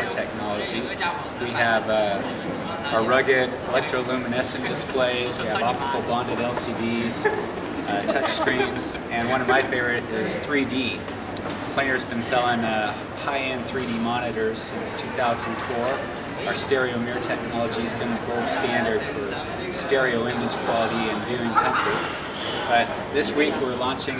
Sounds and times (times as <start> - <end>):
Speech: 0.0 - 7.3, 7.9 - 11.0, 11.8 - 22.1, 22.7 - 24.1.